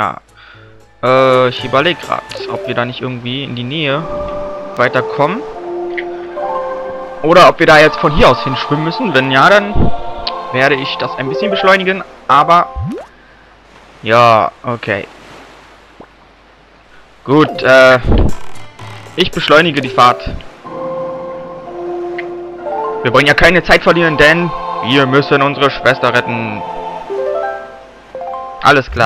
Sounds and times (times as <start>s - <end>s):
Music: 0.0s - 13.0s, 17.4s - 28.9s
Speech: 1.0s - 4.1s, 4.8s - 5.4s, 7.3s - 9.8s, 10.6s - 12.7s, 14.0s - 15.1s, 17.3s - 18.2s, 19.2s - 20.4s, 23.1s - 26.6s, 28.6s - 29.0s.